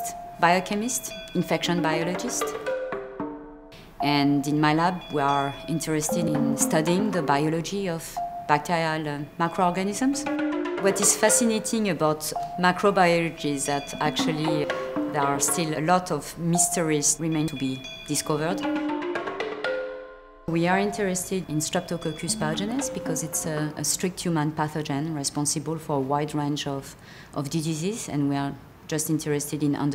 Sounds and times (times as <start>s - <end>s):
Percussion: 0.0s - 24.8s.